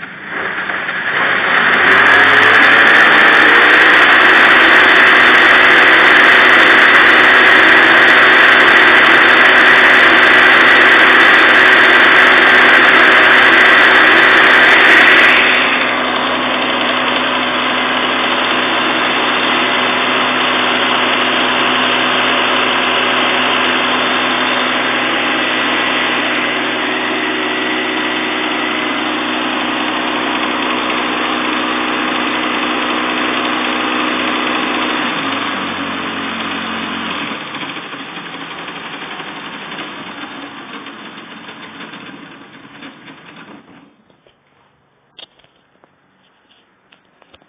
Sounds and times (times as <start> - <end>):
Heavy engine (low frequency): 0.0 - 47.4.